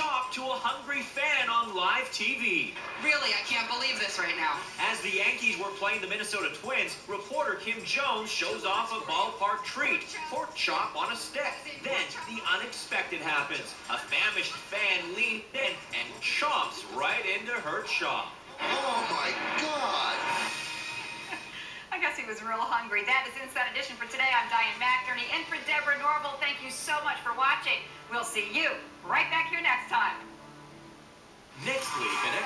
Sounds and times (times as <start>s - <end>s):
Music: 0.0s - 32.4s.